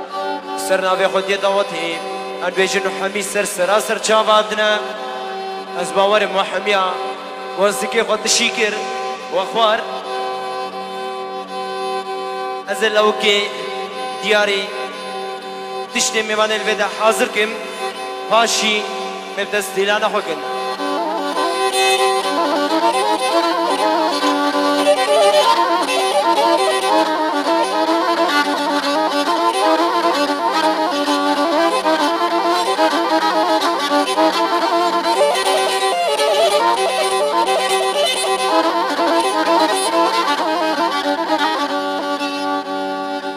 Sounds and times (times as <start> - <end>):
Music: 0.0 - 43.3
Speech: 0.6 - 5.0, 5.8 - 9.9, 12.7 - 13.6, 14.2 - 14.8, 15.9 - 17.7, 18.3 - 20.4.